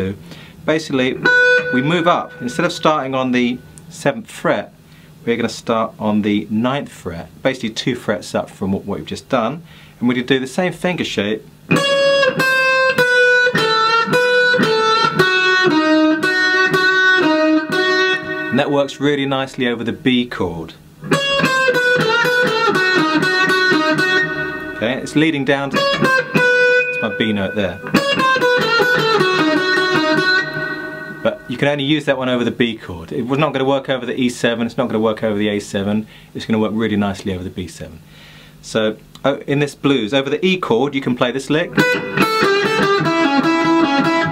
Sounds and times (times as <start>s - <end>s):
Tapping (guitar technique): 1.0s - 3.9s, 11.7s - 18.9s, 21.0s - 31.6s, 41.7s - 44.3s.